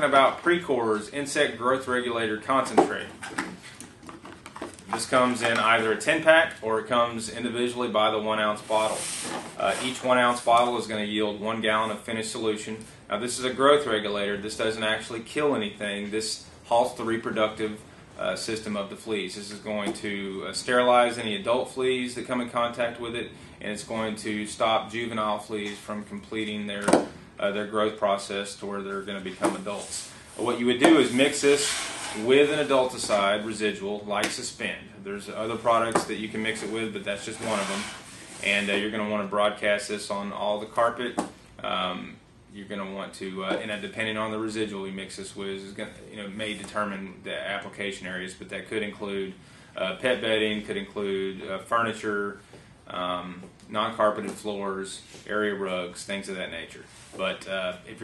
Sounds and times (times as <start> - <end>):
Speech: 0.0 - 3.2, 4.9 - 58.0.